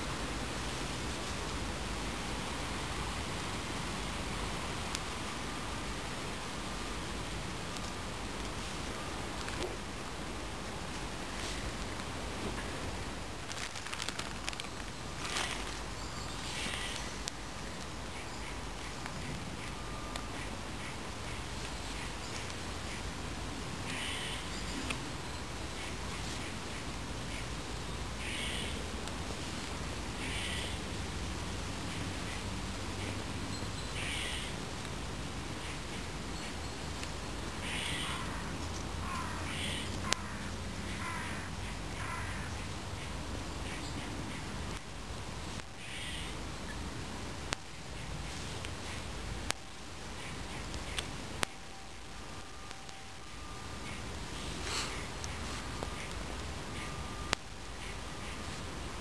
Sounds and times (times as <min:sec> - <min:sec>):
Fire: 0:00.0 - 0:59.0
Outside, rural or natural: 0:00.0 - 0:59.0.